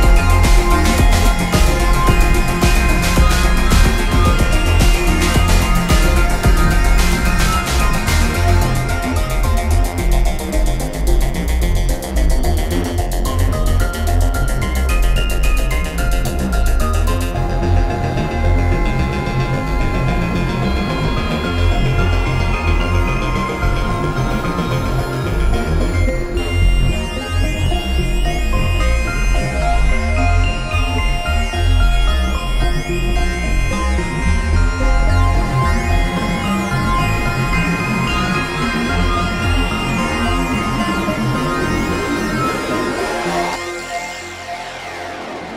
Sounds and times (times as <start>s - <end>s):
Synthesizer: 0.0s - 45.5s.